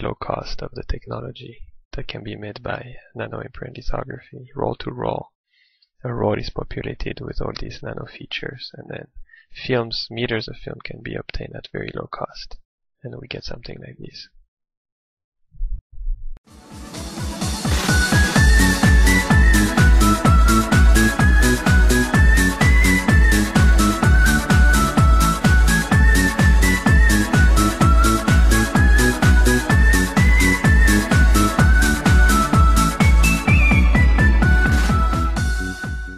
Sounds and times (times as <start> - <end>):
Speech: 0.0 - 5.3, 6.0 - 14.4
Music: 16.5 - 36.1.